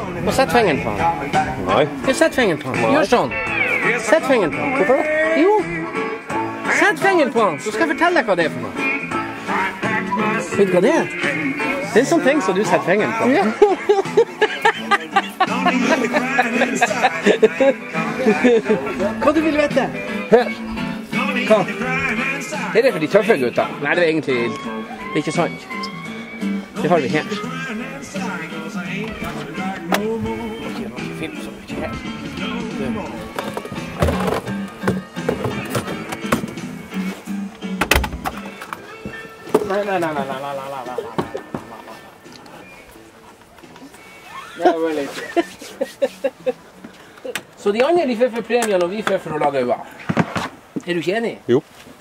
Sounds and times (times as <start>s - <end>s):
Music: 0.0s - 51.2s.